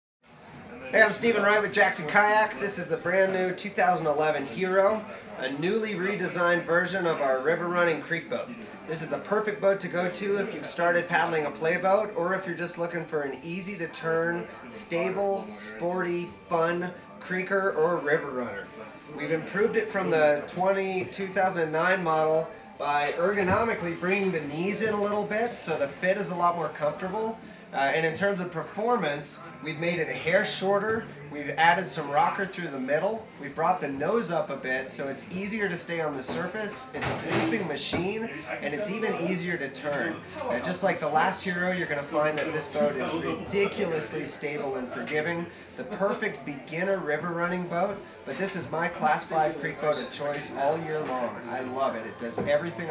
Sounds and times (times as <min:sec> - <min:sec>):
Speech: 0:00.4 - 0:52.9.